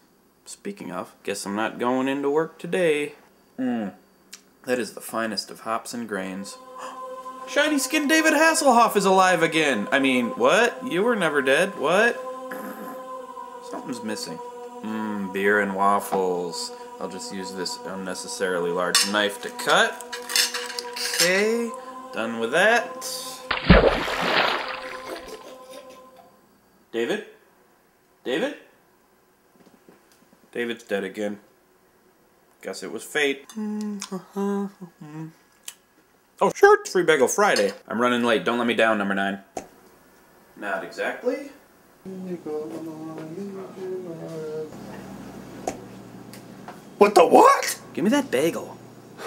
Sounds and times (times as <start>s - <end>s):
Cutlery, silverware: 20.2s - 21.3s.